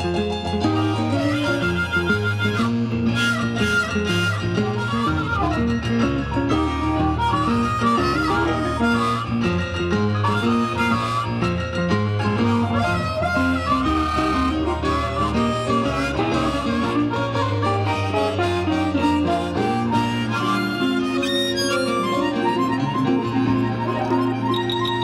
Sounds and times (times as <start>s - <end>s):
Blues: 0.0s - 25.0s.